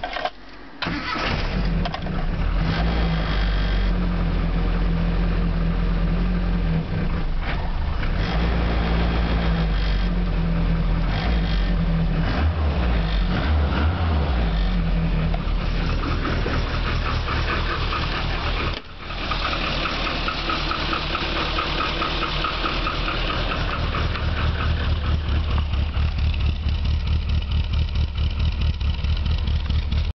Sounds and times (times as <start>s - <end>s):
Car: 0.0s - 30.1s
Medium engine (mid frequency): 0.0s - 30.1s
Idling: 8.9s - 30.1s.